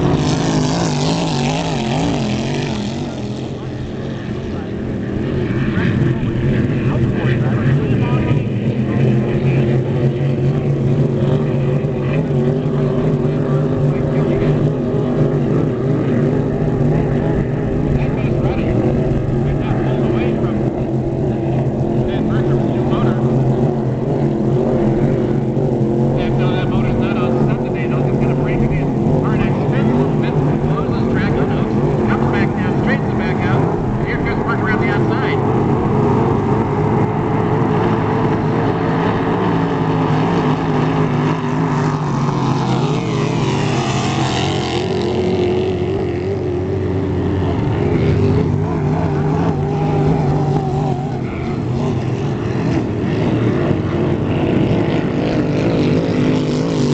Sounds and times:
Motorboat, speedboat: 0.0 - 56.9
Speech: 6.6 - 9.8, 17.9 - 23.2, 26.2 - 35.4.

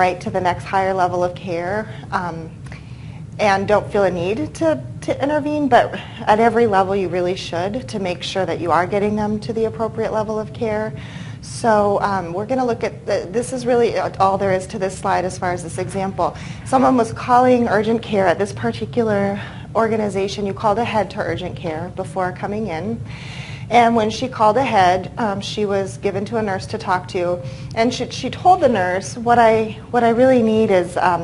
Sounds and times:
Speech: 0.0 - 2.6, 3.4 - 23.0, 23.7 - 31.2.

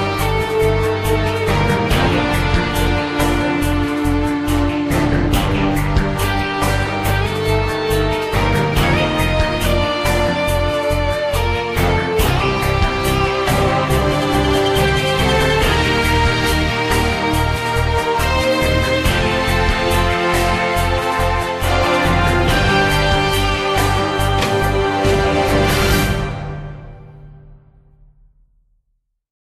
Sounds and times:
Exciting music: 0.0 - 28.4.

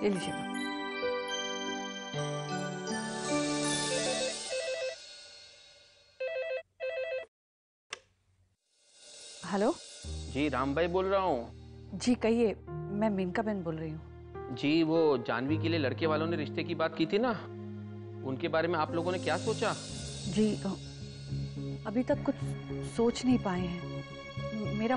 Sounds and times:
Speech: 0.0 - 0.4, 9.5 - 17.5
Music: 0.0 - 6.0, 9.0 - 24.9
Telephone bell ringing: 3.8 - 5.1, 6.2 - 7.3.

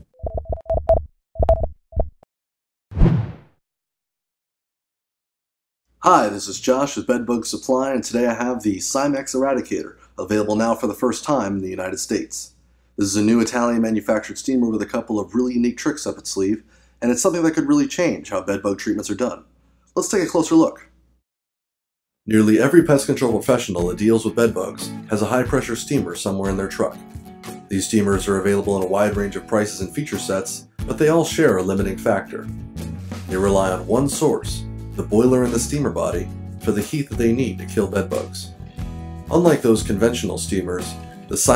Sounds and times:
Speech: 6.0 - 21.0, 22.3 - 27.0, 27.7 - 32.5, 33.3 - 38.6, 39.3 - 41.5
Music: 22.3 - 41.5.

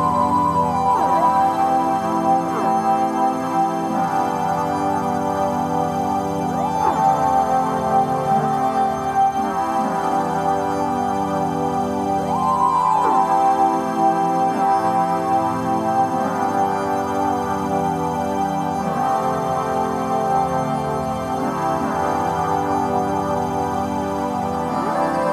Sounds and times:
Music: 0.0 - 25.3.

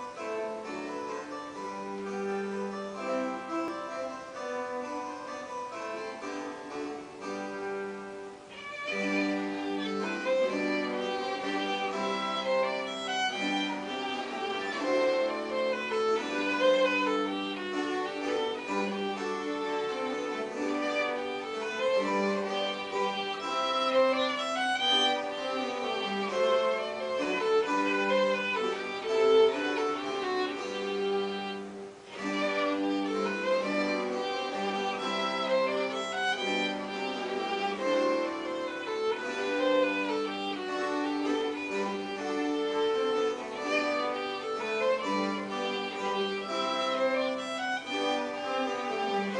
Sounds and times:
Violin, fiddle: 0.0 - 49.3.

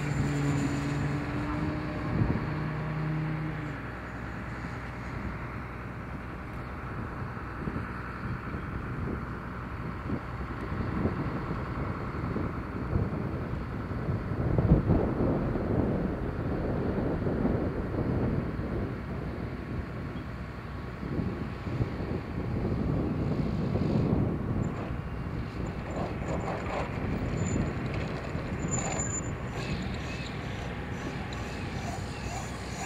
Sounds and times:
Aircraft: 0.0 - 32.8.

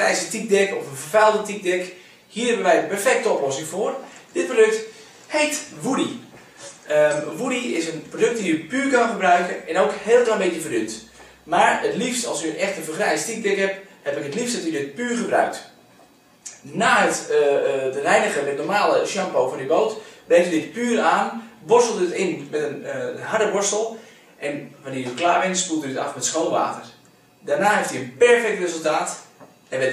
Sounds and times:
Speech: 0.0 - 15.8, 16.5 - 29.9.

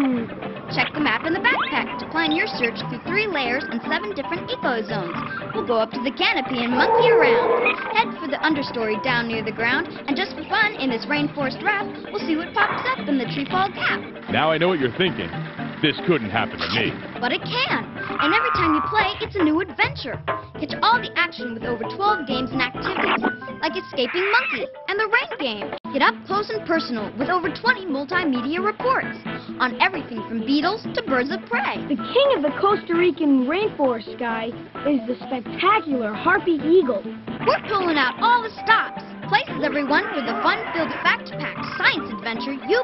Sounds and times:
Music: 0.0 - 42.8
Speech: 0.7 - 15.2, 15.8 - 23.0, 23.6 - 42.8.

